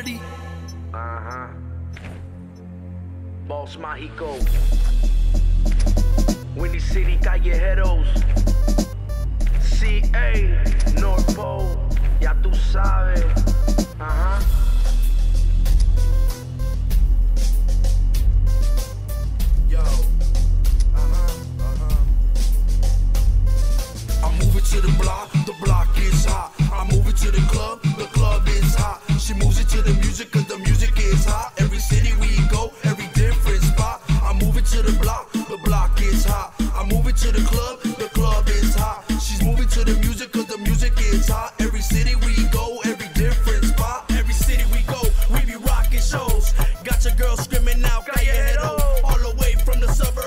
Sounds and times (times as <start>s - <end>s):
Pop music: 0.0s - 2.1s, 3.8s - 50.2s
Rhythm and blues: 0.0s - 2.7s, 4.4s - 50.2s.